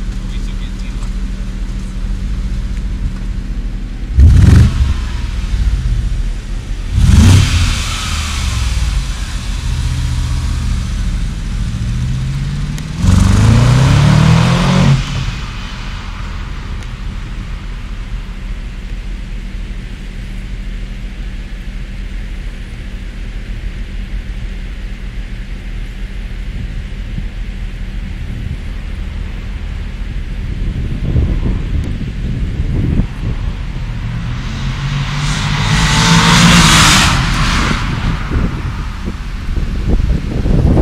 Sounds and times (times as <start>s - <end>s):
Car: 0.0s - 40.8s.